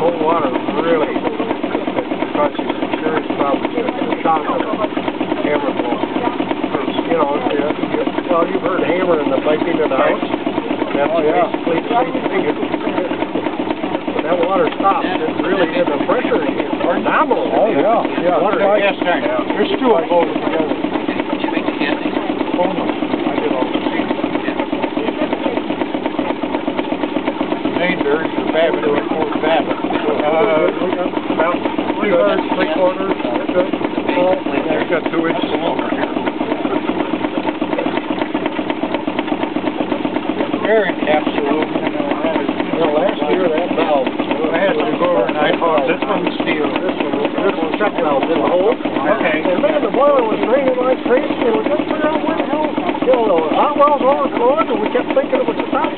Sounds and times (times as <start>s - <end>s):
Speech: 0.0s - 25.8s, 27.6s - 38.2s, 40.3s - 55.9s.